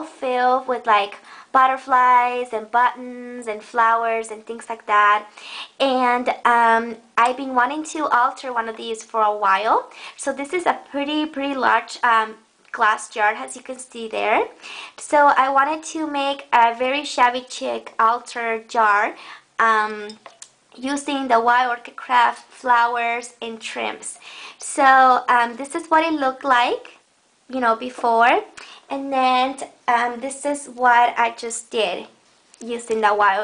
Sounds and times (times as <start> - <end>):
Speech: 0.0 - 20.2, 20.8 - 33.4.